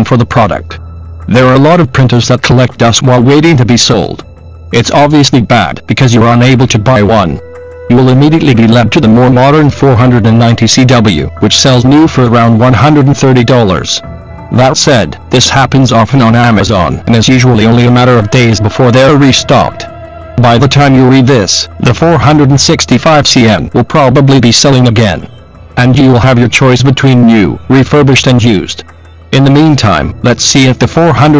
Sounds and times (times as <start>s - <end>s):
Speech: 0.0s - 14.0s, 14.6s - 31.3s
Music: 0.0s - 31.3s.